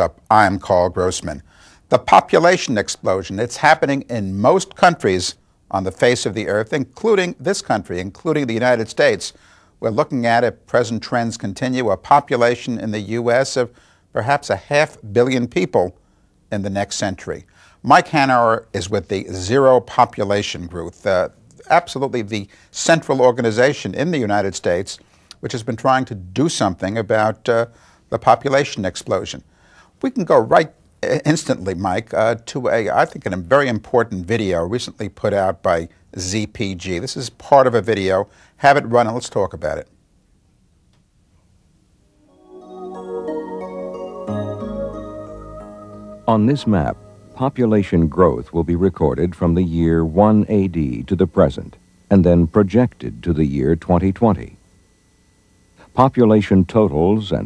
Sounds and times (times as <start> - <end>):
Speech: 0.0 - 40.0, 46.3 - 54.6, 55.9 - 57.4.